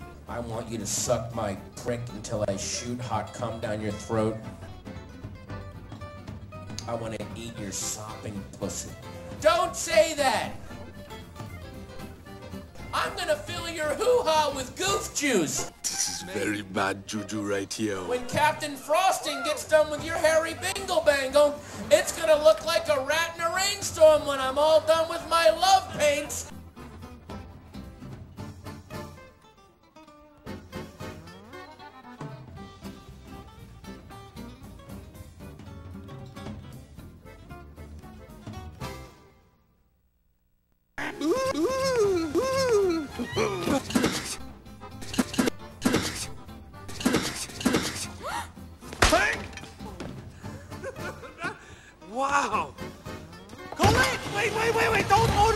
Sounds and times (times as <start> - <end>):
Music: 0.0 - 40.0, 41.0 - 55.5
Speech: 0.3 - 4.5, 6.8 - 10.6, 12.8 - 26.5, 53.8 - 55.5.